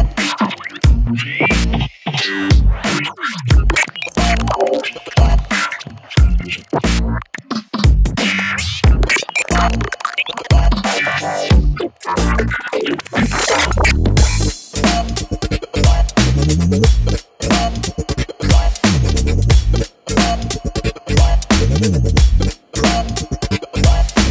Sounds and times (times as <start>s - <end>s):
Music: 0.0s - 24.3s.